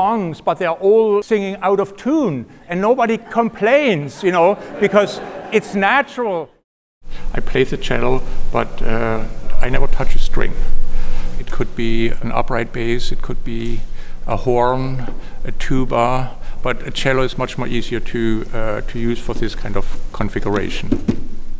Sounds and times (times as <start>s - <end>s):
Speech: 0.0s - 6.6s, 7.3s - 10.6s, 11.4s - 20.9s.